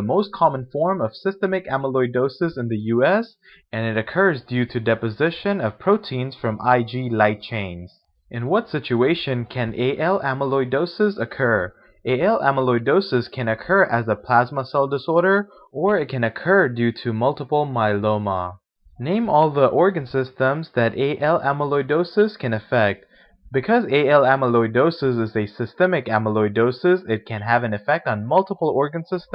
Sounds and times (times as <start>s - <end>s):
Narration, monologue: 0.0s - 29.3s.